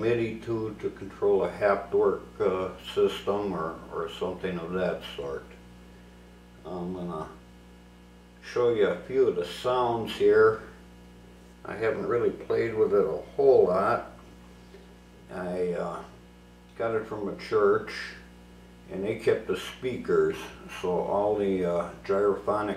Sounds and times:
Speech: 0:00.0 - 0:05.6, 0:06.6 - 0:07.4, 0:08.4 - 0:10.8, 0:11.6 - 0:14.2, 0:15.3 - 0:18.3, 0:18.9 - 0:22.7.

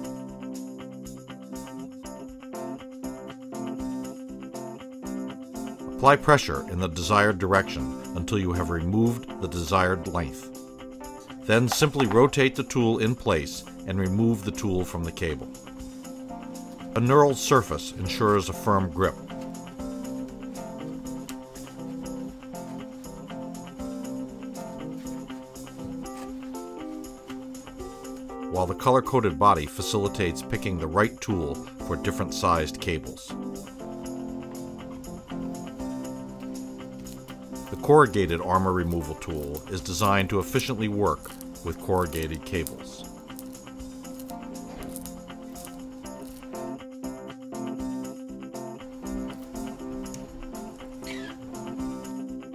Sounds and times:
Music: 0:00.0 - 0:52.5
Speech: 0:06.0 - 0:10.5, 0:11.5 - 0:15.5, 0:17.0 - 0:19.2, 0:28.5 - 0:33.4, 0:37.7 - 0:43.0.

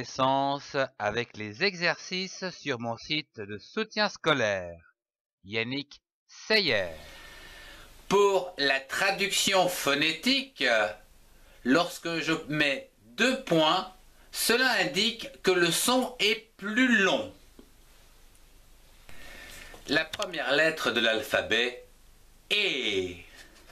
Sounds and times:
Speech: 0:00.0 - 0:04.9, 0:05.5 - 0:07.0, 0:08.1 - 0:11.0, 0:11.6 - 0:17.4, 0:19.9 - 0:21.9, 0:22.5 - 0:23.3.

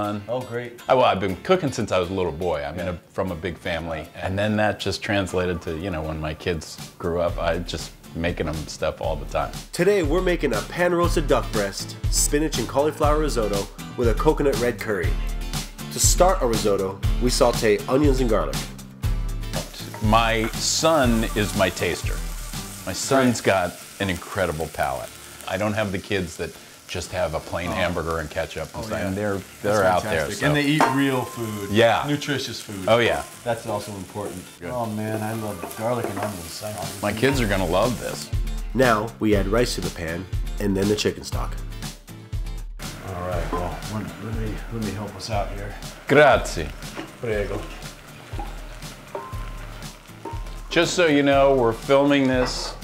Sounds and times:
Speech: 0:00.0 - 0:15.2, 0:16.0 - 0:18.6, 0:20.0 - 0:22.2, 0:22.8 - 0:41.6, 0:43.0 - 0:47.8, 0:50.7 - 0:52.8
Music: 0:00.0 - 0:52.8.

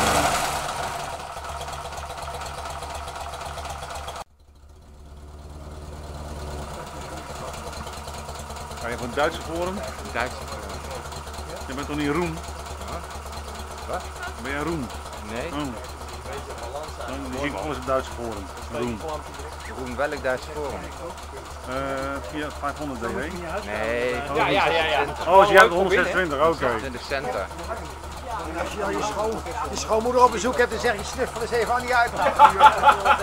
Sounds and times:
Medium engine (mid frequency): 0:00.0 - 0:33.2
Speech: 0:13.9 - 0:33.2.

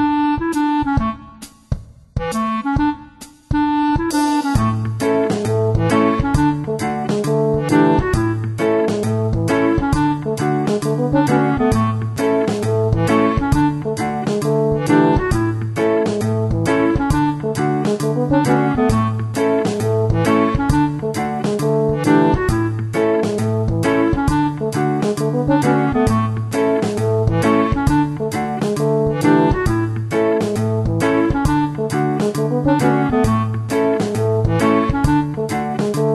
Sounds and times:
Music: 0:00.0 - 0:36.1.

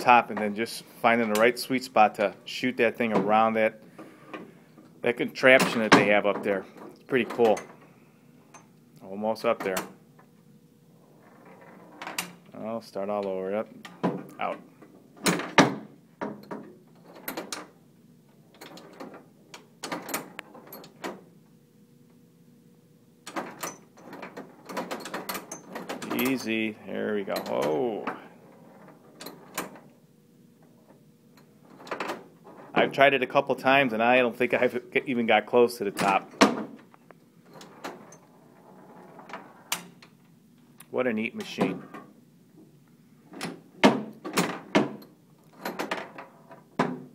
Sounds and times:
Speech: 0:00.0 - 0:03.8, 0:05.0 - 0:07.6, 0:09.0 - 0:09.9, 0:12.5 - 0:13.8, 0:14.4 - 0:14.6, 0:26.1 - 0:28.3, 0:32.8 - 0:36.3, 0:40.8 - 0:41.9
Inside, small room: 0:00.0 - 0:47.1.

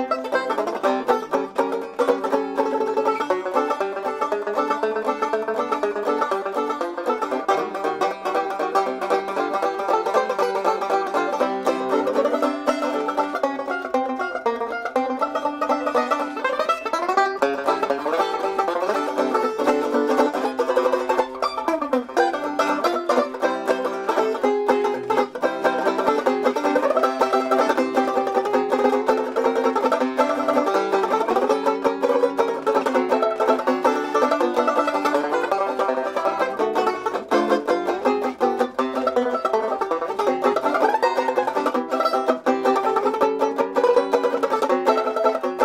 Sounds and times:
Banjo: 0:00.0 - 0:45.6
Country: 0:00.0 - 0:45.6.

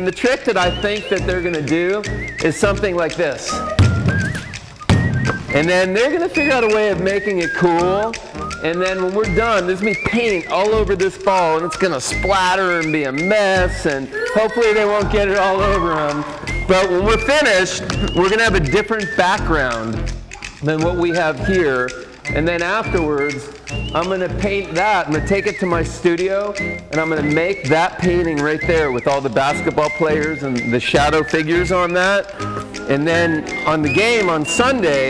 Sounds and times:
Speech: 0:00.0 - 0:03.6, 0:05.6 - 0:19.9, 0:20.5 - 0:32.3, 0:32.9 - 0:35.0
Music: 0:00.0 - 0:35.0
Basketball bounce: 0:03.6 - 0:05.6.

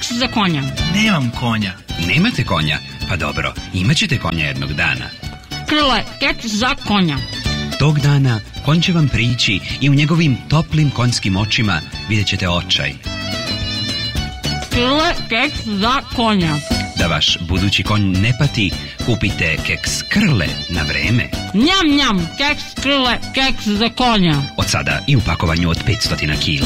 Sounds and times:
Speech: 0:00.0 - 0:07.2, 0:07.8 - 0:13.0, 0:14.8 - 0:26.6
Music: 0:00.0 - 0:26.6.

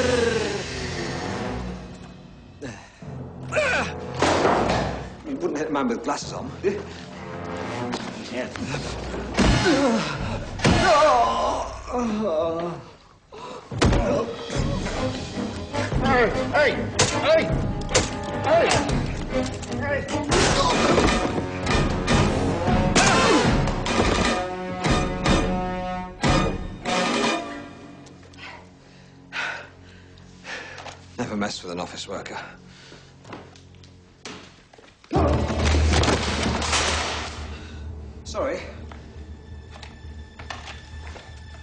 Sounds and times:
Music: 0:00.0 - 0:41.6.

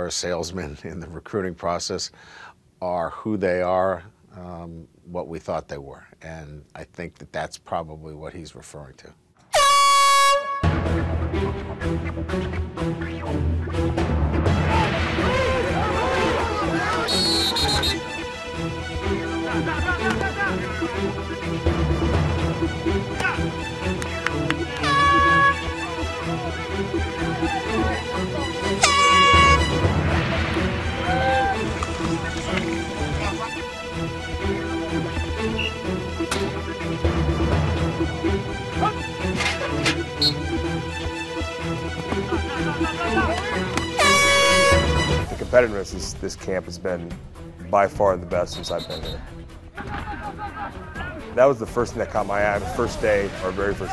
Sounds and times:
Air horn, truck horn: 0:09.5 - 0:10.8, 0:17.1 - 0:18.1, 0:24.8 - 0:25.7, 0:28.4 - 0:29.9, 0:40.2 - 0:40.4, 0:43.8 - 0:45.2
Music: 0:09.5 - 0:53.9.

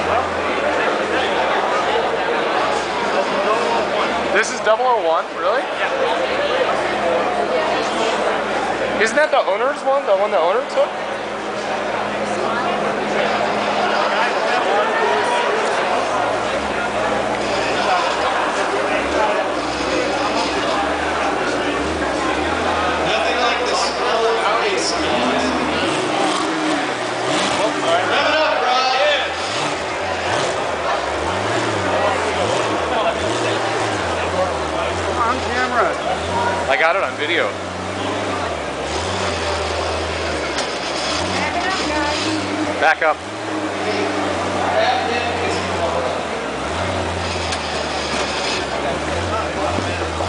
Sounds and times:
Speech: 0:00.0 - 0:40.6, 0:41.3 - 0:46.8, 0:48.5 - 0:50.2.

